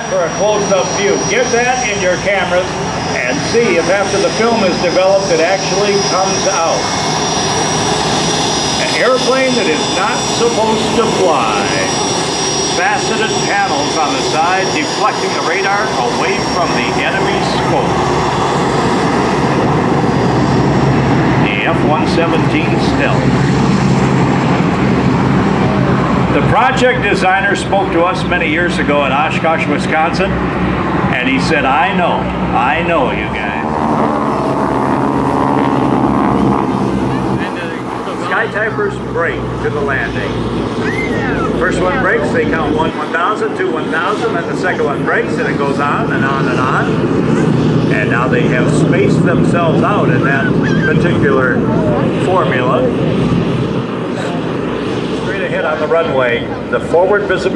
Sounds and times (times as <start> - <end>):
Speech: 0.0 - 6.9, 8.8 - 12.1, 12.7 - 18.0, 21.4 - 23.4, 26.3 - 30.4, 31.1 - 33.7, 37.4 - 40.4, 41.1 - 47.1, 47.8 - 53.0, 55.2 - 57.5
Aircraft engine: 0.0 - 57.5
Fixed-wing aircraft, airplane: 0.0 - 57.5.